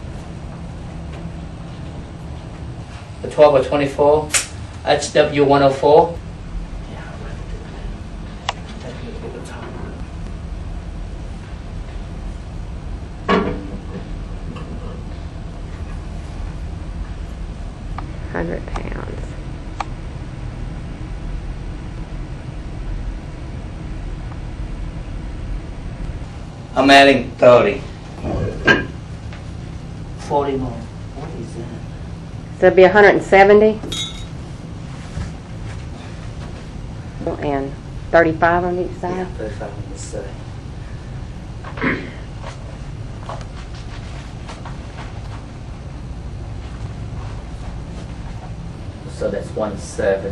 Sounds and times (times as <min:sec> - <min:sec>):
Chink, clink: 0:33.9 - 0:34.3.